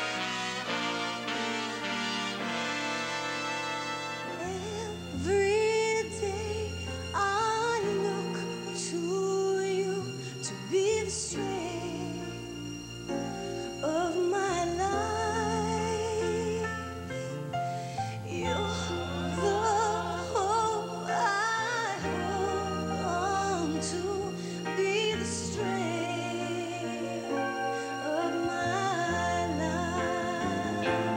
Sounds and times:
Music: 0.0s - 31.1s.

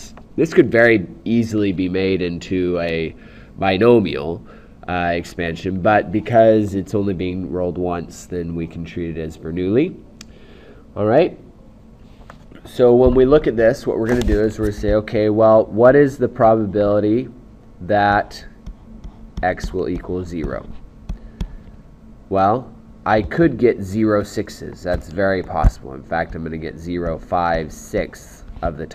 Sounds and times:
Speech: 0.0s - 10.0s, 11.0s - 11.4s, 12.6s - 18.6s, 19.4s - 20.8s, 22.3s - 28.9s.

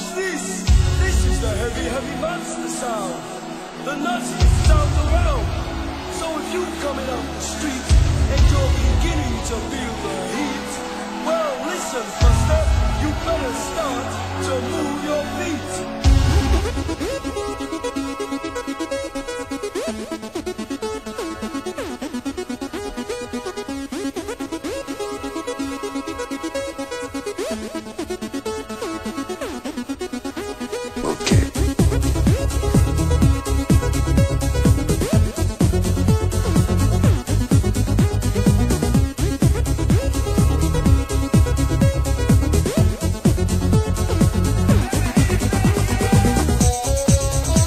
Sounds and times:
Techno: 0.0s - 47.6s.

